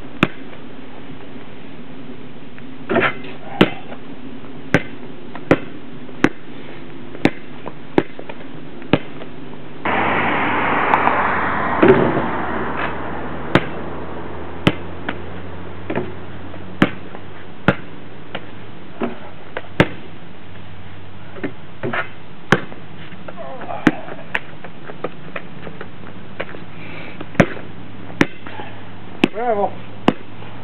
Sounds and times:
Basketball bounce: 14.6 - 15.2, 16.8 - 17.1, 27.4 - 27.6.

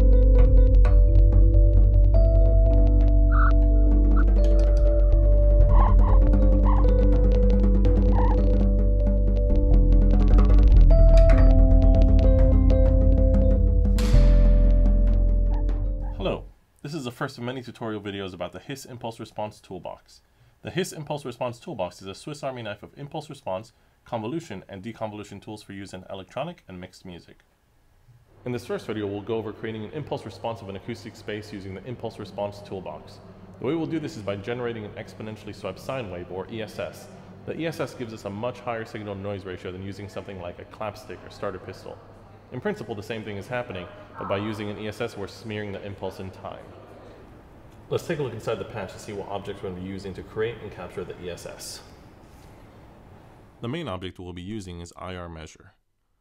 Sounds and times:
Speech: 16.2 - 27.4, 28.4 - 46.8, 47.9 - 51.9, 53.6 - 55.8.

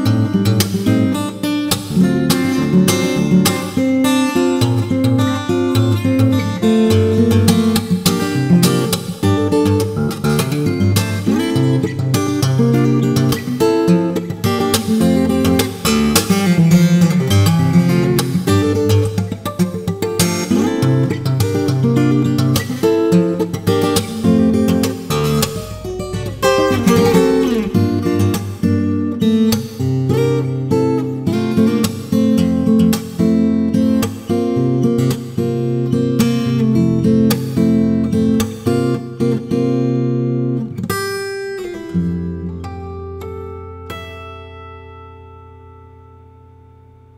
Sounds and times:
Acoustic guitar: 0.0 - 47.1.

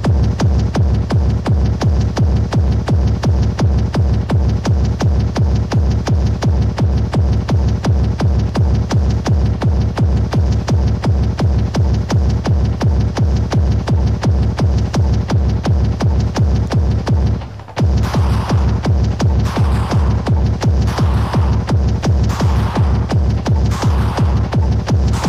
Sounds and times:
Music: 0.0 - 25.2.

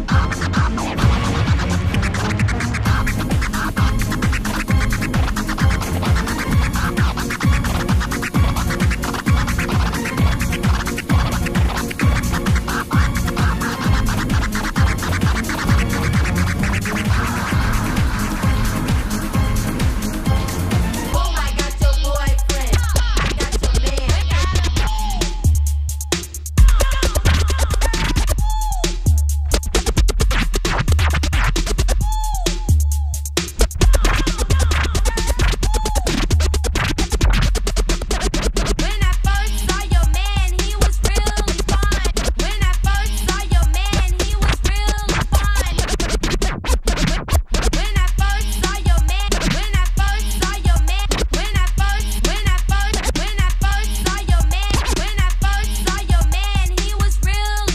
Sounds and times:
Scratching (performance technique): 0.0 - 57.7.

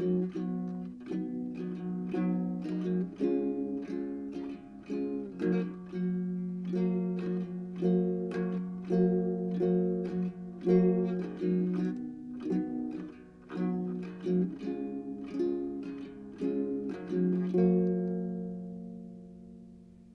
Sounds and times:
Acoustic guitar: 0.0 - 20.1.

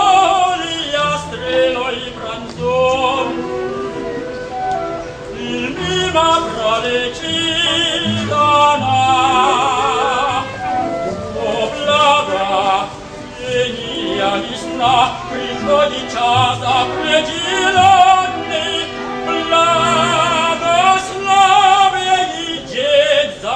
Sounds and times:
Male singing: 0.0 - 3.8, 5.4 - 23.5
Opera: 0.0 - 23.5.

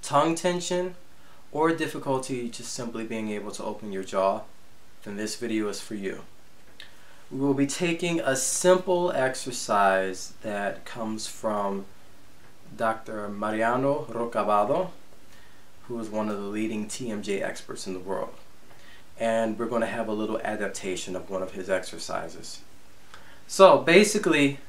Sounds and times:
Speech: 0.0 - 6.3, 7.3 - 11.9, 12.7 - 15.0, 15.9 - 18.4, 19.2 - 22.7, 23.5 - 24.6.

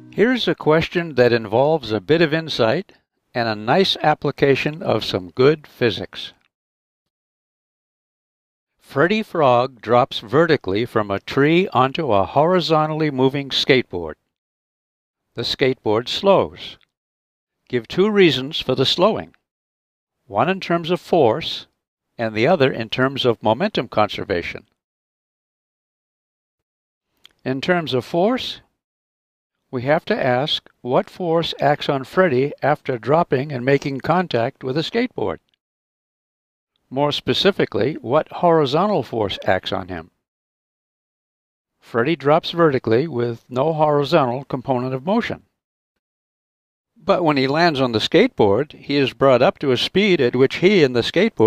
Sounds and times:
Speech: 0.1 - 6.5, 8.8 - 14.2, 15.4 - 16.9, 17.7 - 19.4, 20.3 - 24.8, 27.3 - 28.8, 29.7 - 35.5, 36.9 - 40.2, 41.9 - 45.5, 47.0 - 51.4.

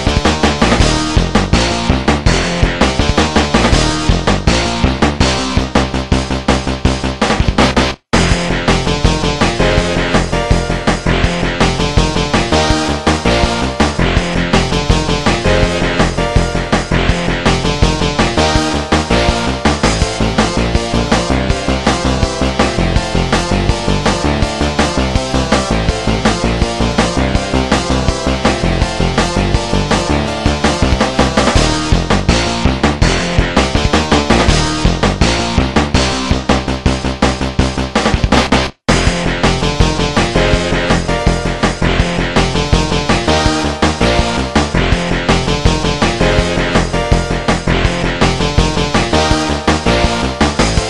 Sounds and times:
Video game music: 0.0 - 50.8.

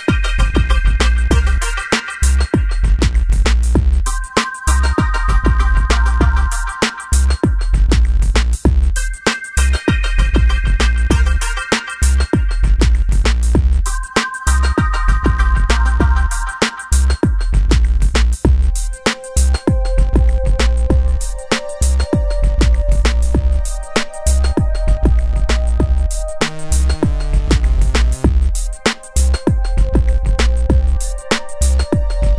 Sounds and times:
Background music: 0.0 - 32.3.

